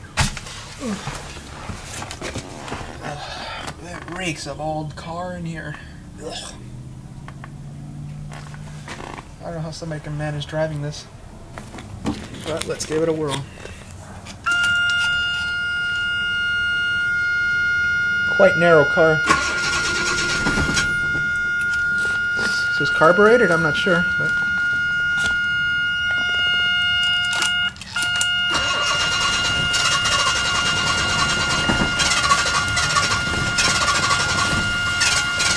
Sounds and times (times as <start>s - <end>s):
Speech: 3.8s - 6.6s, 9.4s - 11.1s, 12.5s - 13.5s, 18.3s - 19.2s, 22.4s - 24.1s.